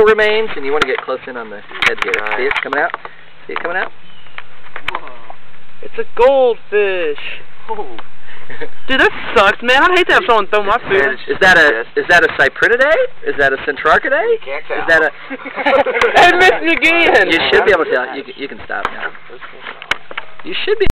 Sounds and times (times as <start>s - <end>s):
Outside, rural or natural: 0.0s - 20.9s.